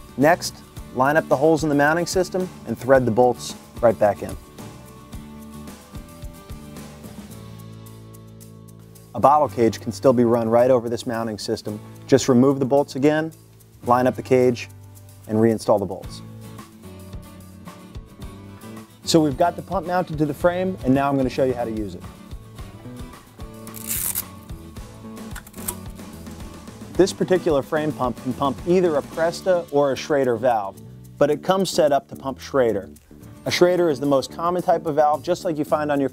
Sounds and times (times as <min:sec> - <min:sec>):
Music: 0:00.0 - 0:36.1
Speech: 0:00.2 - 0:04.4, 0:09.2 - 0:14.7, 0:15.3 - 0:16.2, 0:19.1 - 0:22.1, 0:27.0 - 0:36.1.